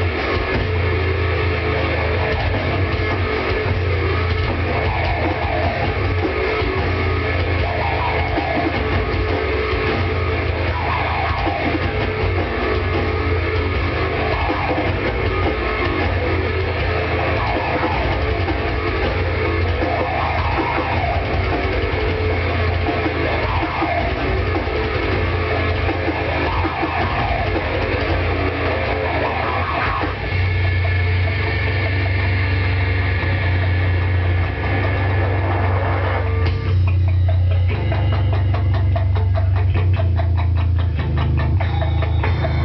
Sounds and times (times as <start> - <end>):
Music: 0.0 - 42.6.